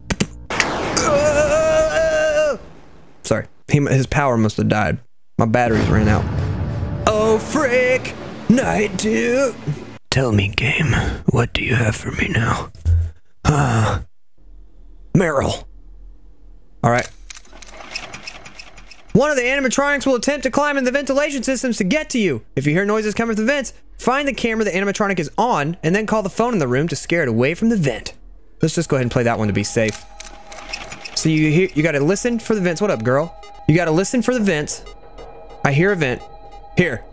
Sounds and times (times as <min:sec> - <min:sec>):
Speech: 0:03.2 - 0:06.3, 0:07.1 - 0:12.7, 0:15.2 - 0:15.7, 0:16.8 - 0:17.1, 0:19.2 - 0:30.0, 0:31.2 - 0:34.8, 0:35.7 - 0:36.2, 0:36.8 - 0:37.1.